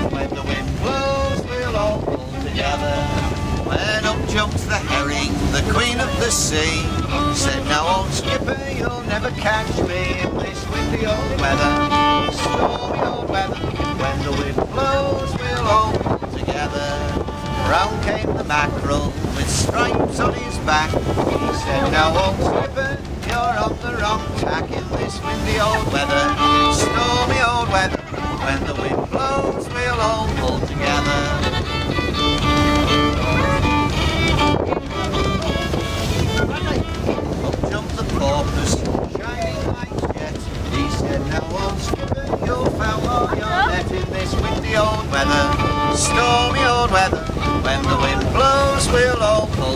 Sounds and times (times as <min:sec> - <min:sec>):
Boat, Water vehicle: 0:00.0 - 0:49.7
Ocean: 0:00.0 - 0:49.7
Wind noise (microphone): 0:00.0 - 0:49.7.